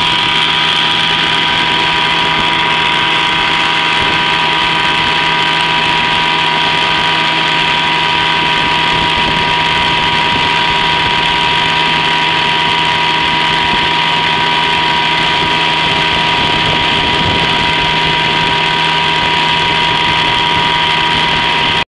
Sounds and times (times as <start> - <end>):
Motorboat, speedboat: 0.0 - 21.8.